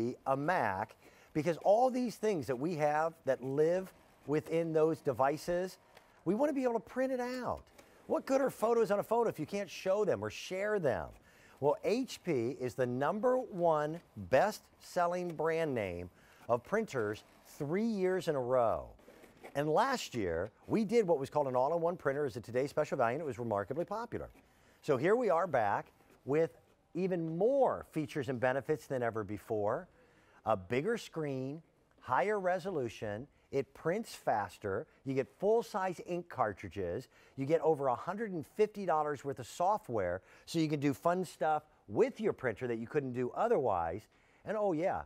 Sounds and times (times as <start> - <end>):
Speech: 0.0 - 45.0.